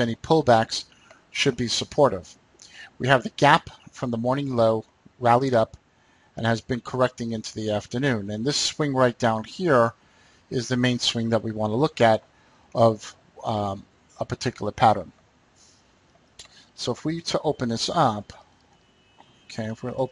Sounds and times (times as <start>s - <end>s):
Speech: 0.0s - 5.8s, 6.4s - 12.2s, 12.8s - 15.1s, 16.8s - 18.4s, 19.5s - 20.1s.